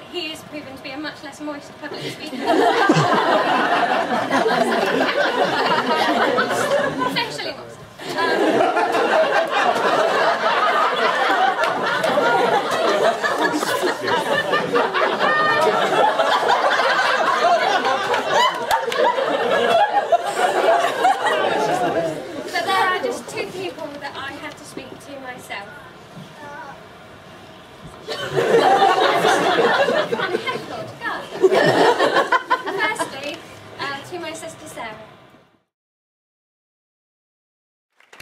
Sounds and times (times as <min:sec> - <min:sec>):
Female speech, woman speaking: 0:00.0 - 0:02.5, 0:06.4 - 0:07.8, 0:22.5 - 0:25.9, 0:30.3 - 0:31.4, 0:32.7 - 0:35.2.